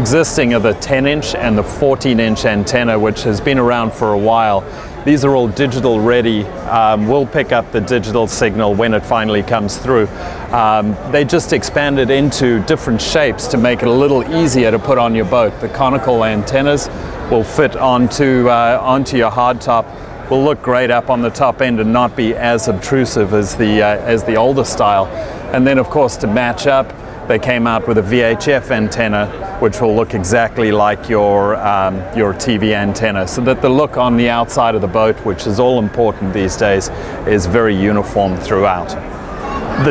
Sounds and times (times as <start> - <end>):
Speech: 0.0 - 39.9.